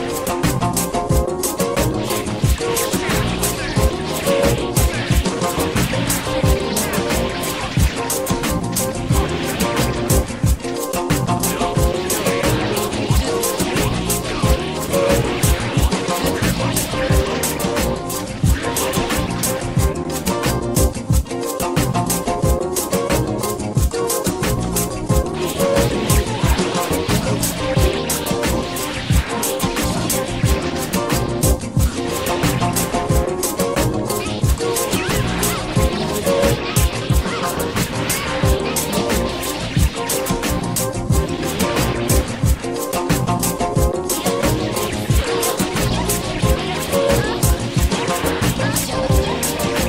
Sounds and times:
Music: 0.0s - 49.8s
Sound effect: 0.0s - 49.8s.

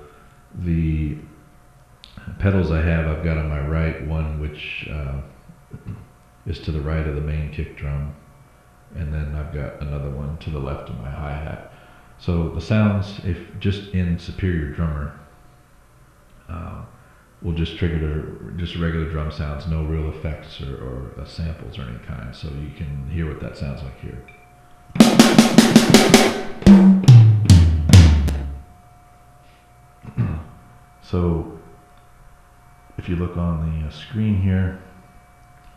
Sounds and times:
Speech: 0.0s - 1.4s, 2.0s - 8.2s, 8.9s - 15.3s, 16.5s - 24.3s, 30.1s - 31.7s, 33.0s - 34.9s
Inside, small room: 0.0s - 35.7s
Drum kit: 25.0s - 28.6s
Bass drum: 25.0s - 28.7s.

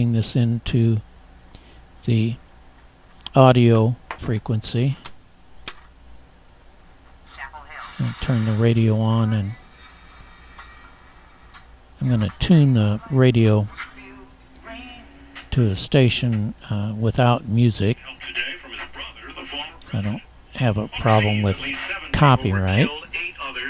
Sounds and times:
Speech: 0.0s - 1.0s, 2.0s - 2.4s, 3.3s - 5.0s, 12.0s - 13.8s, 15.5s - 23.7s.

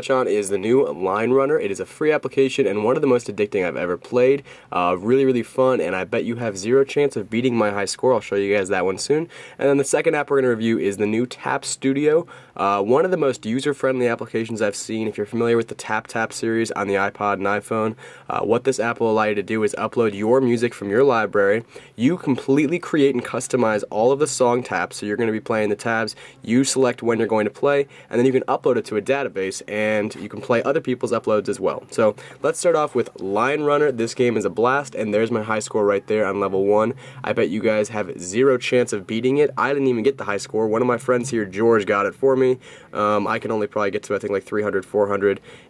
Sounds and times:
Speech: 0.0s - 45.4s.

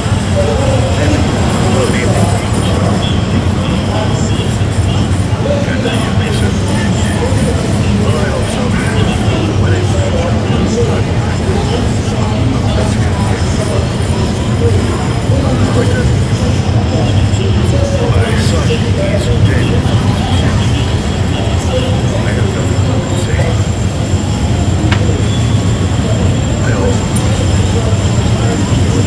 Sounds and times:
Speech: 0.0s - 29.0s.

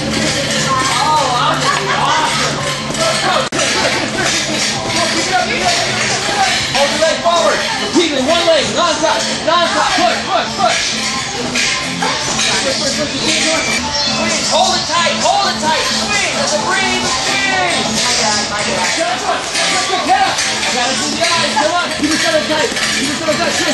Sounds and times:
Techno: 0.0s - 23.7s
Speech: 0.2s - 11.0s, 12.0s - 23.7s.

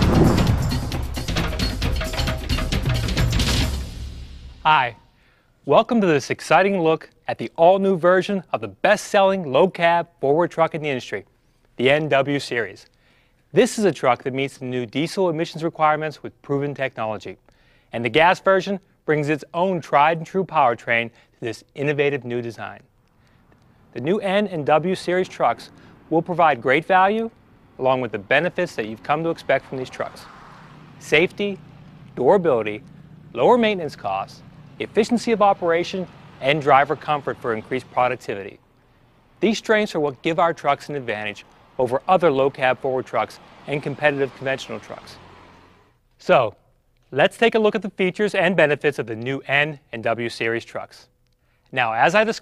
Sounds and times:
Speech: 4.7s - 5.0s, 5.7s - 12.9s, 13.5s - 22.9s, 23.9s - 30.3s, 31.0s - 31.6s, 32.2s - 38.6s, 39.4s - 45.2s, 46.2s - 51.1s, 51.7s - 52.4s.

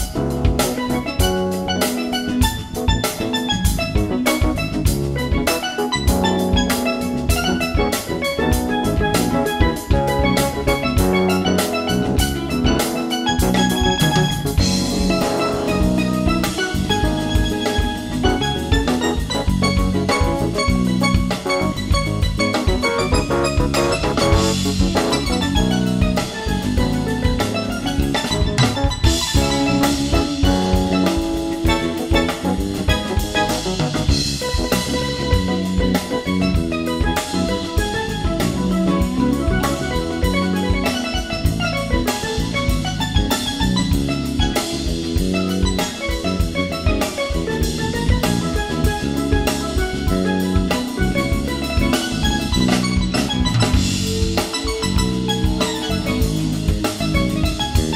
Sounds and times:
Drum: 0.0s - 57.9s
Drum kit: 0.0s - 57.9s
Marimba, xylophone: 0.0s - 57.9s.

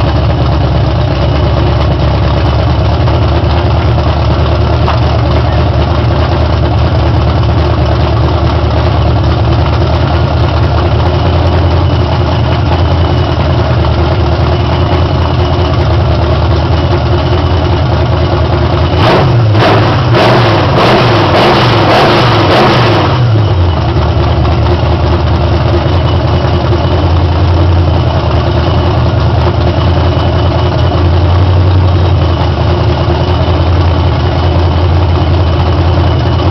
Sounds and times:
Vehicle: 0.0s - 36.5s.

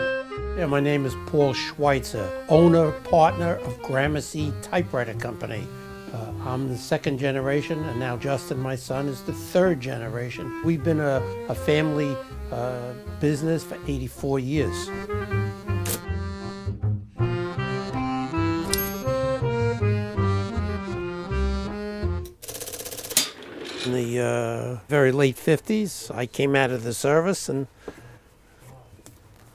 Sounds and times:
Music: 0.0s - 22.4s
Speech: 0.6s - 14.9s, 23.9s - 27.7s.

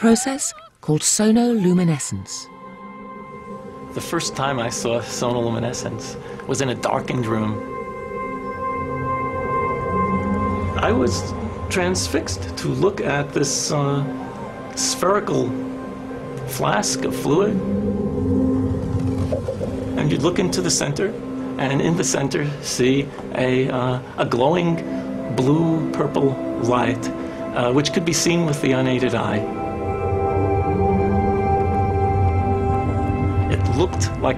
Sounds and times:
Speech: 0.0s - 2.5s, 4.0s - 7.6s, 10.8s - 14.1s, 14.8s - 15.6s, 16.5s - 17.6s, 20.0s - 29.4s, 33.5s - 34.3s
Music: 2.3s - 34.3s.

